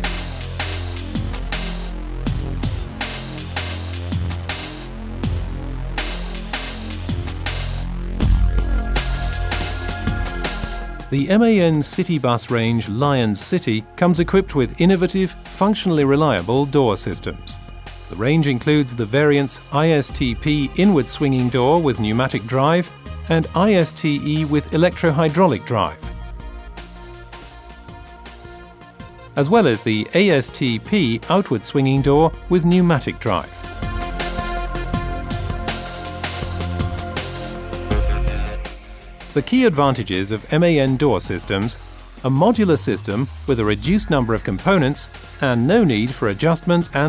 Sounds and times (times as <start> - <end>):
Music: 0.0 - 47.0
Speech: 11.1 - 26.0, 29.4 - 33.6, 39.4 - 47.0.